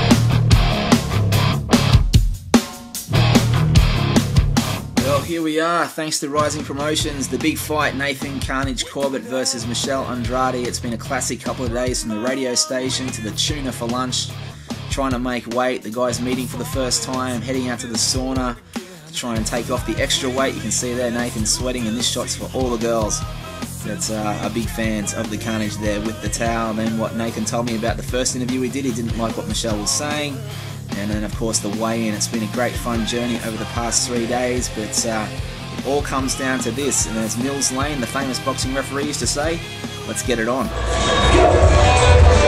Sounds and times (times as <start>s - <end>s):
Music: 0.0s - 42.4s
Speech: 5.0s - 40.7s.